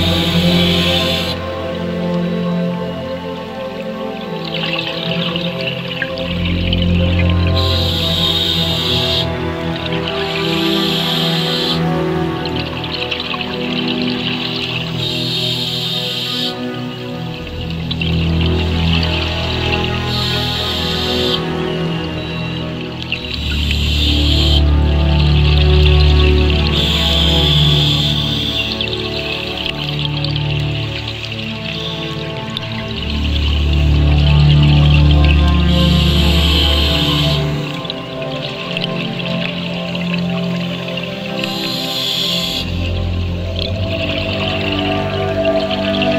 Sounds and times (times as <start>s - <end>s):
Music: 0.0s - 46.1s
Outside, rural or natural: 0.0s - 46.1s.